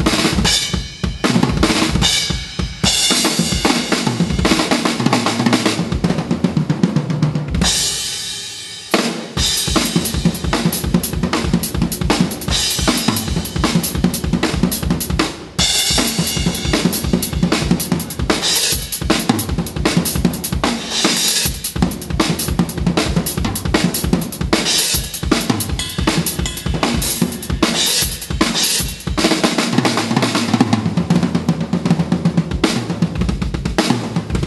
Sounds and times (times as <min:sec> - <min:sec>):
Drum kit: 0:00.0 - 0:34.4
Drum roll: 0:00.0 - 0:34.4
Bass drum: 0:09.4 - 0:18.4, 0:19.0 - 0:20.7, 0:21.7 - 0:29.3, 0:33.2 - 0:34.4.